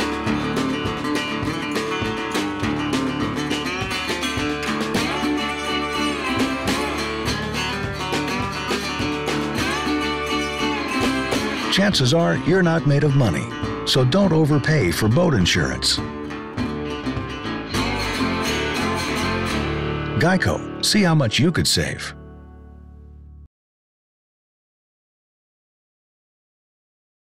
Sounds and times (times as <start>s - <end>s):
Music: 0.0s - 23.5s
Speech: 11.7s - 16.0s, 20.2s - 22.2s.